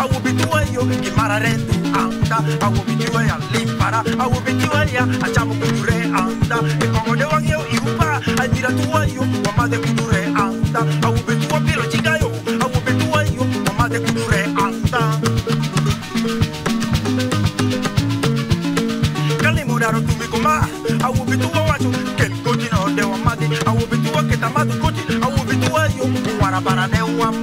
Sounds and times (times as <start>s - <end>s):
Male singing: 0.0s - 15.3s, 19.4s - 27.4s
Music: 0.0s - 27.4s.